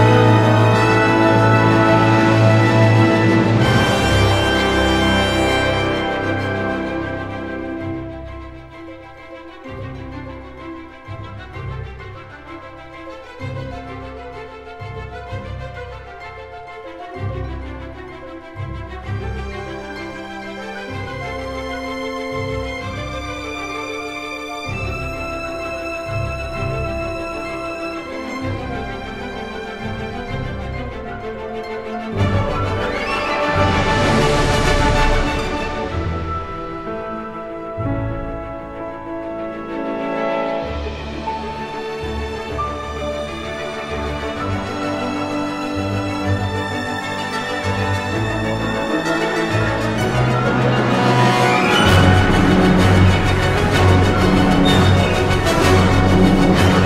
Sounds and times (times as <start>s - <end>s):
Music: 0.0s - 56.8s.